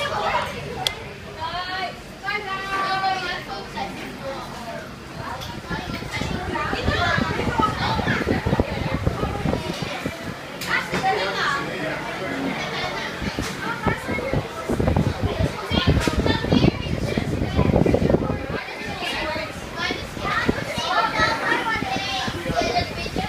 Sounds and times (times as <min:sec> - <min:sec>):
Speech: 0:00.0 - 0:23.2.